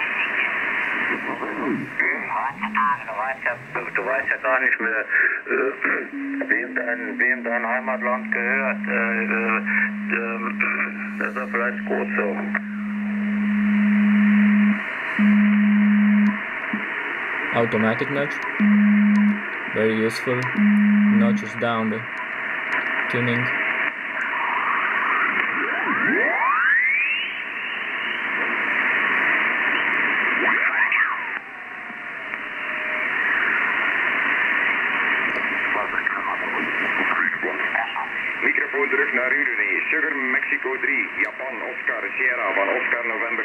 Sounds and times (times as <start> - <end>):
Radio: 0.0 - 22.2, 23.0 - 26.7, 27.3 - 43.4.